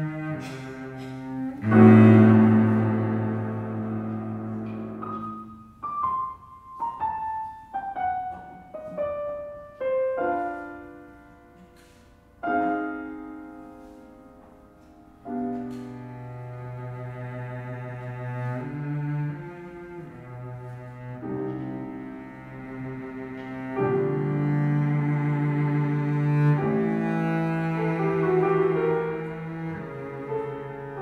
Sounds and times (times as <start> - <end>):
Cello: 0.0 - 31.0.